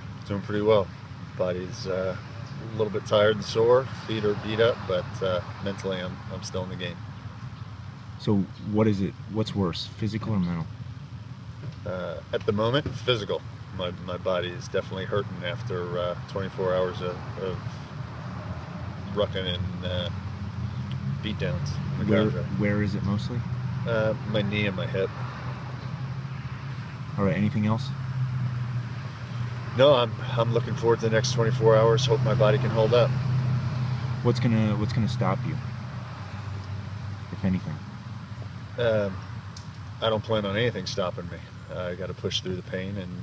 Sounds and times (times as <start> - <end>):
Speech: 0.2 - 7.0, 8.2 - 10.7, 11.8 - 17.8, 19.1 - 20.1, 21.2 - 25.1, 27.2 - 28.0, 29.8 - 33.1, 34.2 - 35.6, 37.3 - 37.8, 38.8 - 39.2, 40.0 - 43.2.